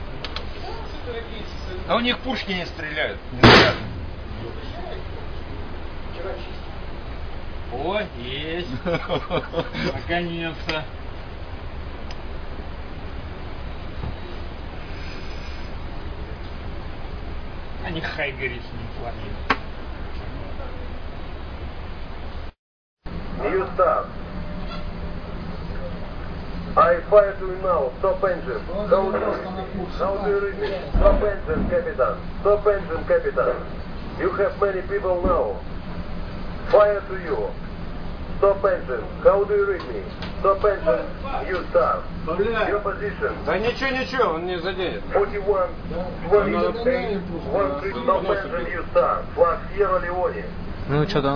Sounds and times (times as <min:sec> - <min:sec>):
Speech: 0:00.6 - 0:03.7, 0:07.7 - 0:08.8, 0:17.8 - 0:19.4, 0:23.4 - 0:24.1, 0:26.8 - 0:35.6, 0:36.7 - 0:37.6, 0:38.4 - 0:51.3.